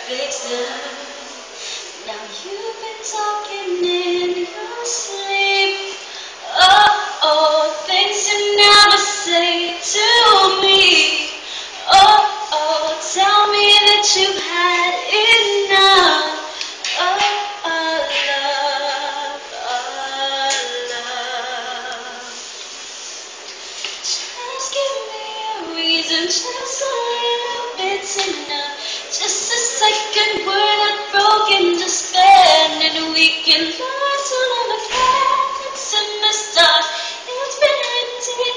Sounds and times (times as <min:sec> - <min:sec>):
Female singing: 0:00.0 - 0:22.4, 0:24.1 - 0:38.5.